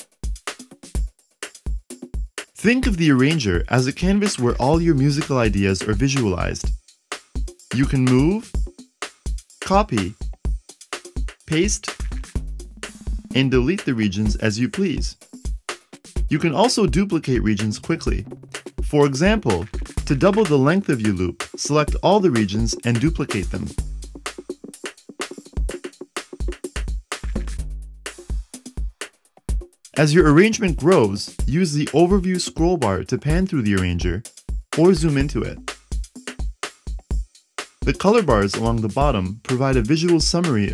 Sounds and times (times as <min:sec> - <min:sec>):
Music: 0:00.0 - 0:40.7
Speech: 0:02.6 - 0:06.7, 0:07.7 - 0:08.5, 0:09.6 - 0:10.2, 0:11.5 - 0:12.0, 0:13.3 - 0:15.2, 0:16.3 - 0:18.2, 0:18.8 - 0:23.8, 0:30.0 - 0:34.2, 0:34.8 - 0:35.6, 0:37.9 - 0:40.7.